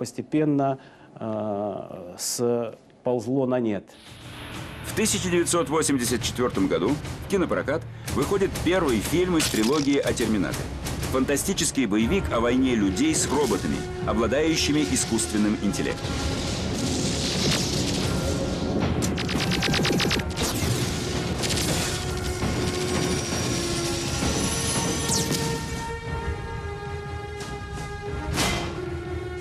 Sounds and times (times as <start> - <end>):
Speech: 0.0 - 3.9, 4.9 - 16.0
Music: 4.0 - 29.4.